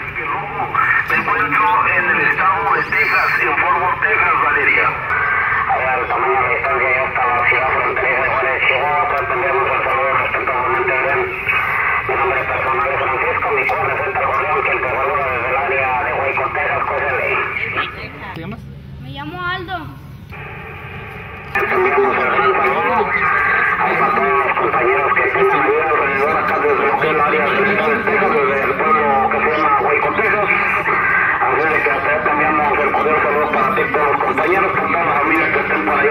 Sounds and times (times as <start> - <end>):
Speech: 0.0 - 5.1, 5.7 - 11.5, 12.1 - 19.9, 21.6 - 36.1
Radio: 0.0 - 18.5, 20.3 - 36.1.